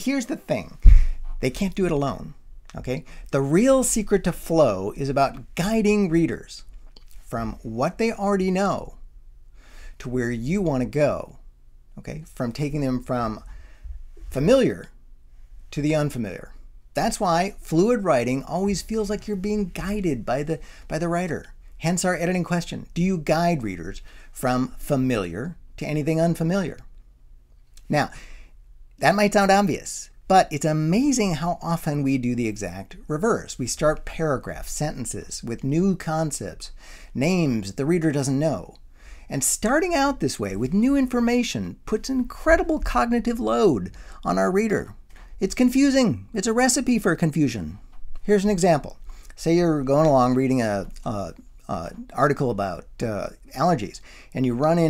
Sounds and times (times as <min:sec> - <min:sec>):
Speech: 0:00.0 - 0:09.0, 0:10.0 - 0:11.4, 0:12.0 - 0:13.5, 0:14.3 - 0:15.0, 0:15.7 - 0:26.9, 0:27.9 - 0:28.2, 0:29.0 - 0:54.8.